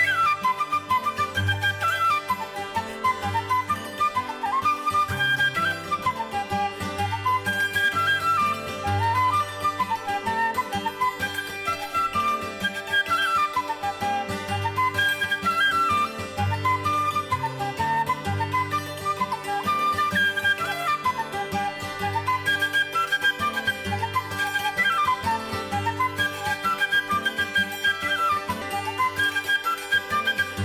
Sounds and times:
Traditional music: 0:00.0 - 0:30.6.

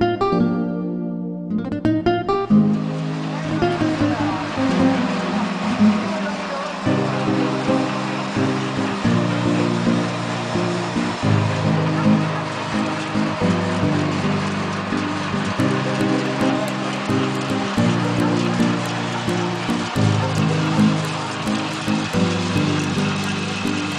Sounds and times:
Music: 0:00.0 - 0:23.9.

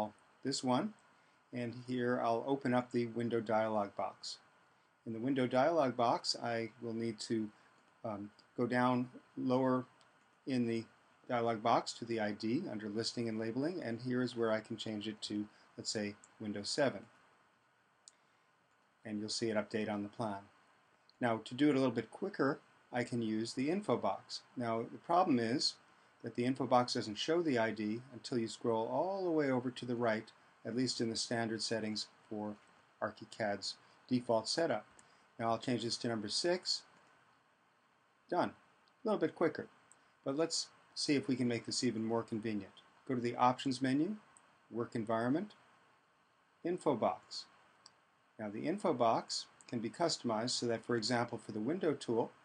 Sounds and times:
Speech: 0:00.0 - 0:01.0, 0:01.6 - 0:04.4, 0:05.1 - 0:09.9, 0:10.5 - 0:17.1, 0:19.1 - 0:20.5, 0:21.2 - 0:36.9, 0:38.3 - 0:39.7, 0:40.3 - 0:45.6, 0:46.7 - 0:47.5, 0:48.4 - 0:52.4.

